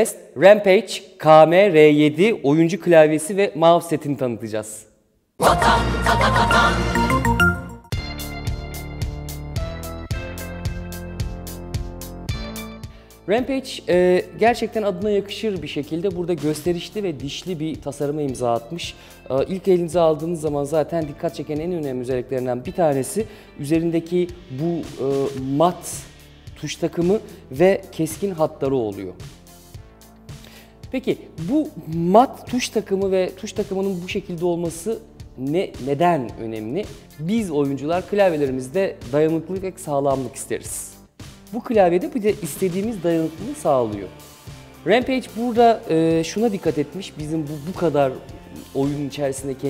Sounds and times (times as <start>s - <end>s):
Speech: 0.0s - 5.6s, 13.3s - 29.2s, 30.9s - 44.2s, 44.9s - 49.7s
Music: 5.4s - 49.7s.